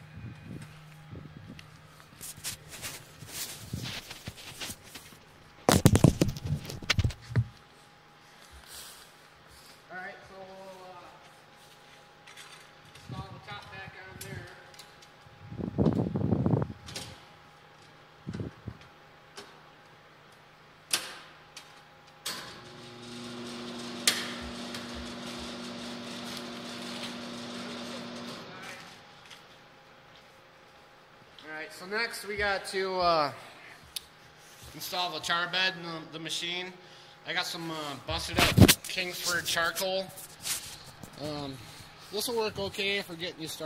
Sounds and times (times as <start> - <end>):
Speech: 9.9 - 11.2, 13.1 - 14.7, 31.4 - 33.5, 34.7 - 40.2, 41.2 - 43.6.